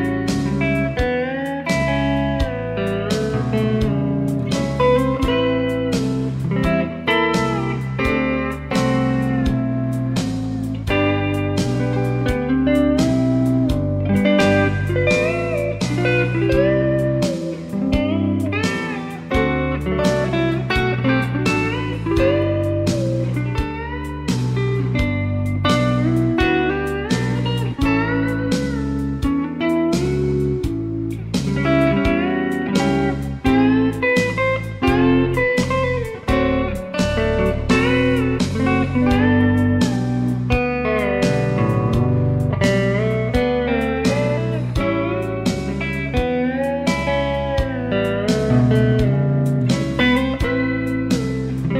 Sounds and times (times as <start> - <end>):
Bass guitar: 0.0 - 51.7
Steel guitar, slide guitar: 0.0 - 51.7.